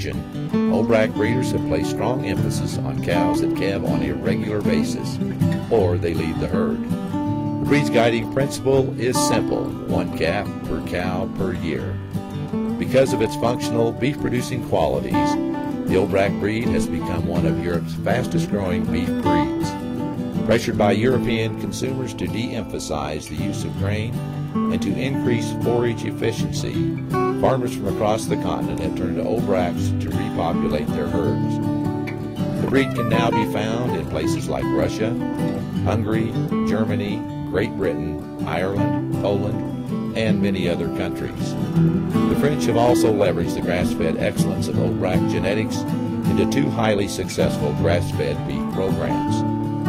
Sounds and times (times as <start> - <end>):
Speech: 0.0 - 6.9, 7.6 - 12.0, 12.8 - 19.8, 20.4 - 31.6, 32.6 - 35.2, 35.8 - 41.6, 42.3 - 49.5
Music: 0.0 - 49.8.